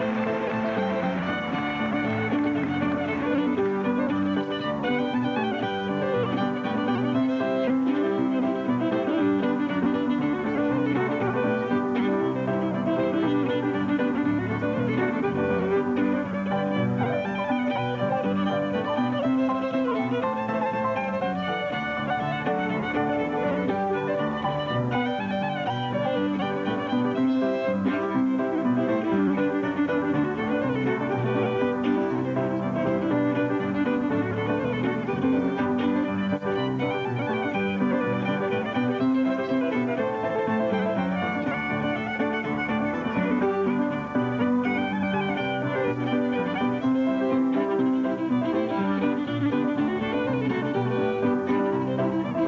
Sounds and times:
Violin, fiddle: 0.0s - 52.4s.

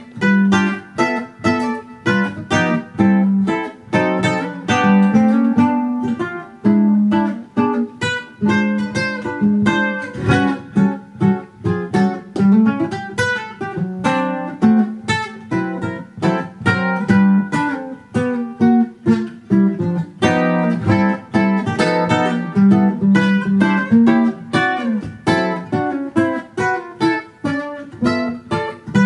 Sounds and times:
Strum: 0.0s - 29.0s
Ukulele: 0.0s - 29.0s.

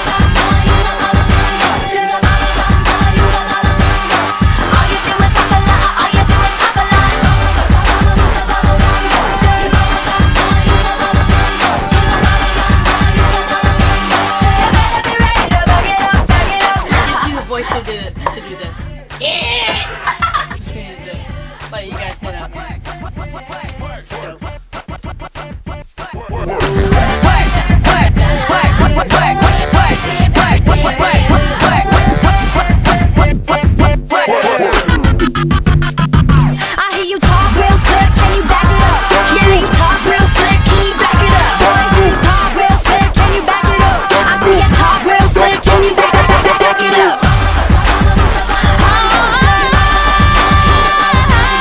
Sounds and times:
Singing: 0.0s - 35.1s, 36.6s - 51.6s
Pop music: 0.0s - 51.6s
Speech: 17.0s - 20.0s, 21.7s - 22.5s, 23.7s - 24.4s, 34.3s - 35.0s
Snicker: 19.7s - 20.6s.

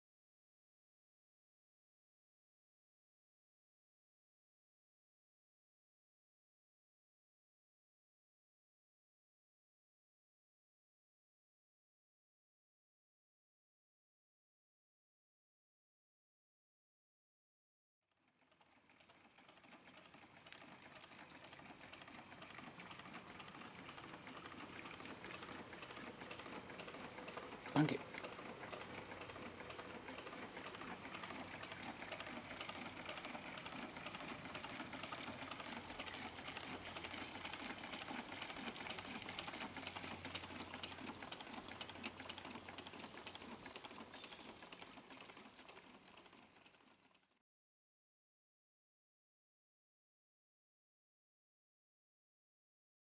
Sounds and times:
Engine: 18.2s - 47.4s.

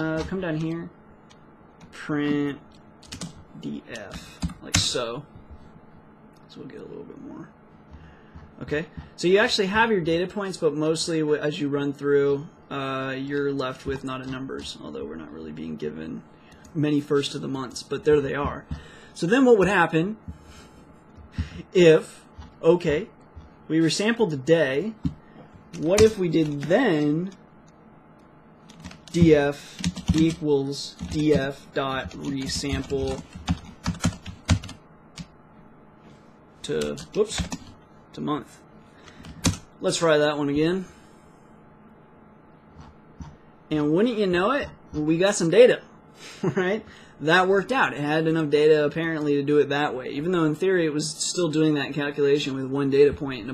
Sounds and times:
Speech: 0.0s - 1.0s, 1.9s - 2.6s, 3.6s - 5.3s, 6.5s - 7.6s, 8.6s - 20.2s, 21.6s - 25.0s, 25.8s - 27.4s, 29.1s - 33.2s, 36.6s - 37.5s, 38.1s - 38.6s, 39.8s - 40.9s, 43.7s - 45.8s, 46.5s - 53.5s
Computer keyboard: 3.0s - 3.4s, 25.7s - 27.4s, 28.7s - 35.3s, 36.8s - 37.8s, 39.2s - 39.6s.

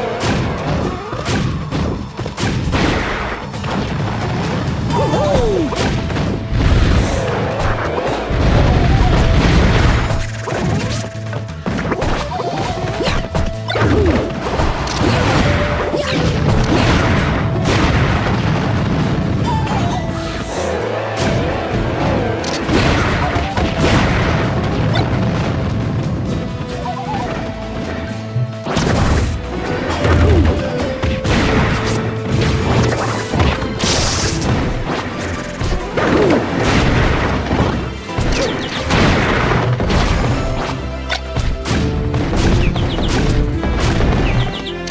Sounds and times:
Music: 0.0s - 44.9s.

